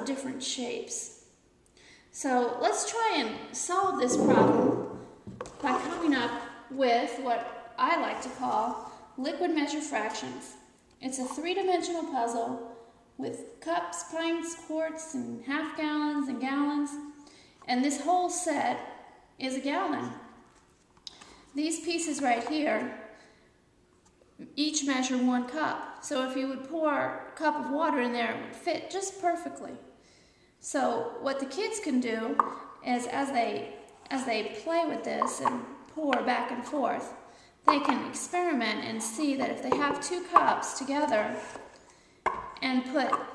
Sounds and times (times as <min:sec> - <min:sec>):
Speech: 0:00.0 - 0:01.2, 0:02.2 - 0:04.8, 0:05.6 - 0:12.6, 0:13.2 - 0:17.0, 0:17.7 - 0:18.8, 0:19.4 - 0:20.2, 0:21.6 - 0:23.0, 0:24.4 - 0:29.9, 0:30.6 - 0:37.1, 0:37.7 - 0:41.6, 0:42.6 - 0:43.3.